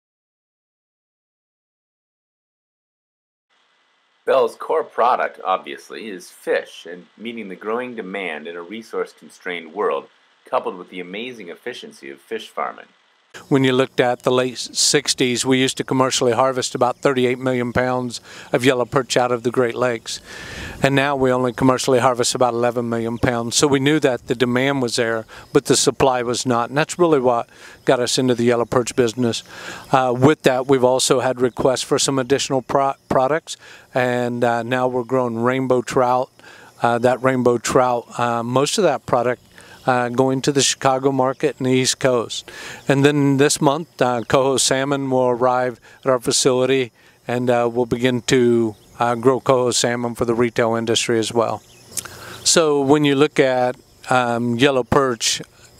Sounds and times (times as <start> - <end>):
Speech: 4.3 - 51.6, 52.4 - 55.5.